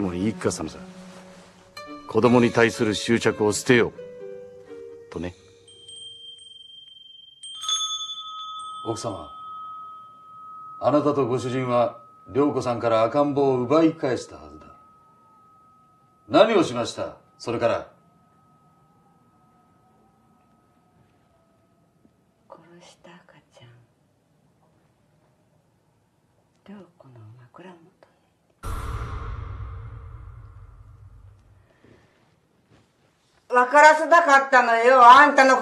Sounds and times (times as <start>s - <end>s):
Ding-dong: 5.4s - 20.6s.